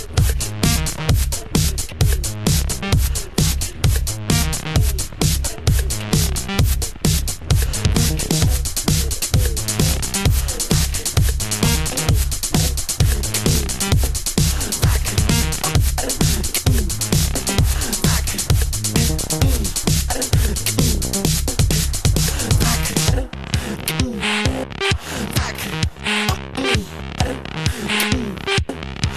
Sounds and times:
Music: 0:00.0 - 0:29.1.

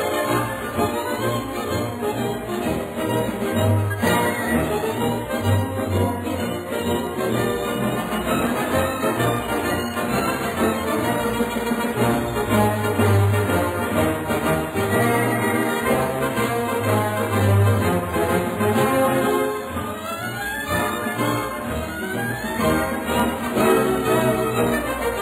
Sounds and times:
Music: 0:00.0 - 0:25.2.

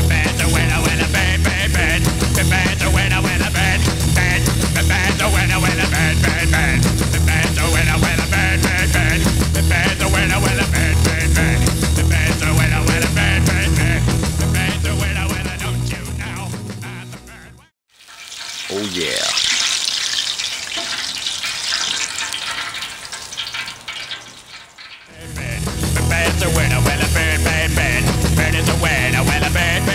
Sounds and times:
Frying (food): 0:00.0 - 0:12.3, 0:17.9 - 0:29.9.

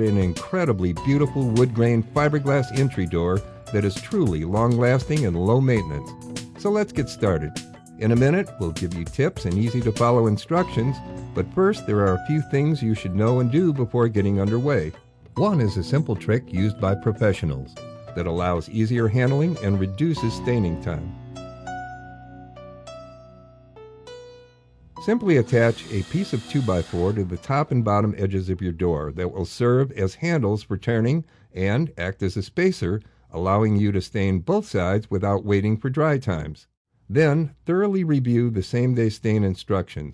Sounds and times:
Speech: 0:00.0 - 0:21.1, 0:25.0 - 0:40.1
Music: 0:00.0 - 0:32.0.

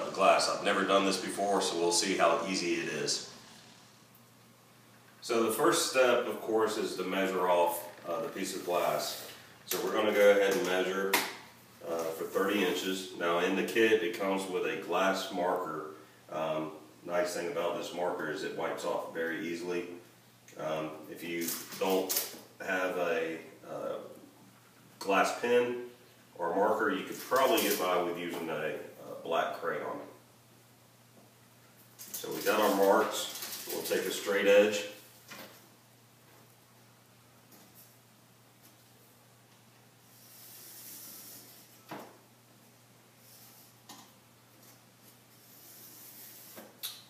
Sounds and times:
Speech: 0:00.0 - 0:03.3, 0:05.2 - 0:11.2, 0:11.8 - 0:24.2, 0:25.0 - 0:30.2, 0:32.2 - 0:35.0.

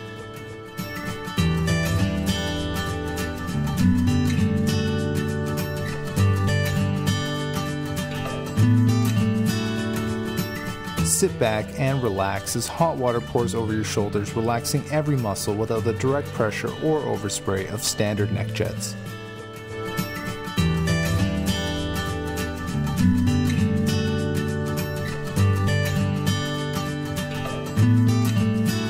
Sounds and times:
Music: 0:00.0 - 0:28.8
Speech: 0:11.1 - 0:19.0.

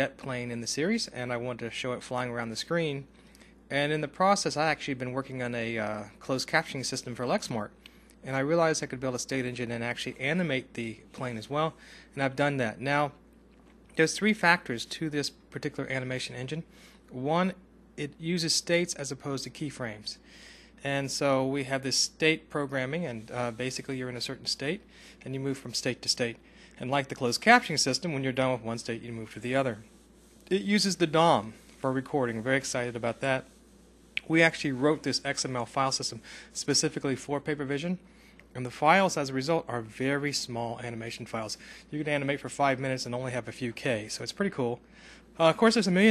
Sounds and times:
Speech: 0:00.0 - 0:03.1, 0:03.7 - 0:13.2, 0:13.9 - 0:33.6, 0:34.2 - 0:44.8, 0:45.4 - 0:46.1.

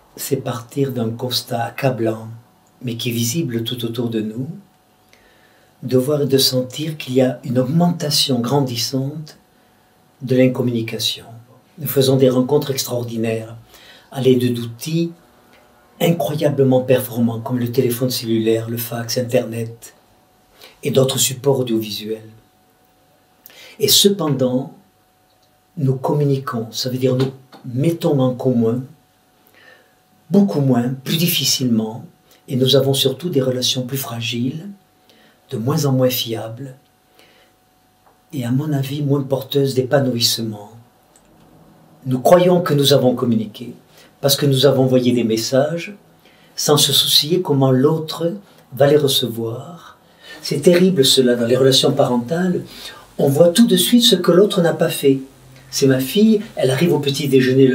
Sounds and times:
Speech: 0:00.0 - 0:04.7, 0:05.8 - 0:09.4, 0:10.2 - 0:15.2, 0:16.0 - 0:20.0, 0:20.8 - 0:22.4, 0:23.7 - 0:24.8, 0:25.8 - 0:29.0, 0:30.3 - 0:34.8, 0:35.5 - 0:36.9, 0:38.3 - 0:40.9, 0:42.0 - 0:46.0, 0:46.6 - 0:57.7.

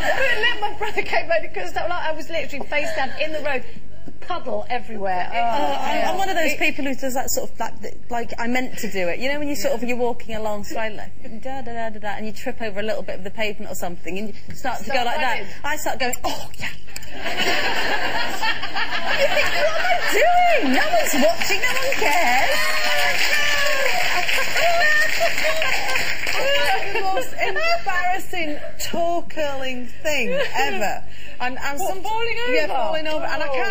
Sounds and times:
Female speech, woman speaking: 0:00.0 - 0:16.5, 0:19.2 - 0:25.6, 0:26.4 - 0:33.7
Snicker: 0:17.1 - 0:20.6.

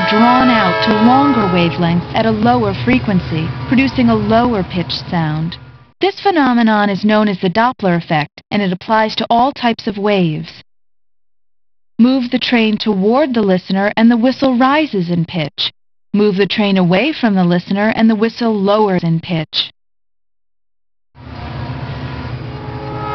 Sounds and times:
Speech: 0:00.0 - 0:10.6, 0:12.0 - 0:19.7.

